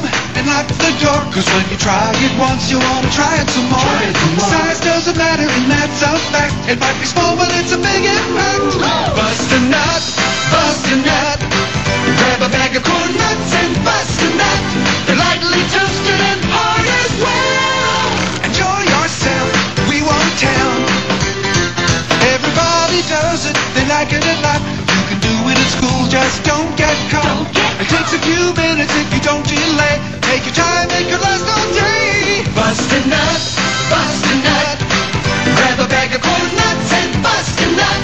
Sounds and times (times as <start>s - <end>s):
Music: 0.0s - 38.0s.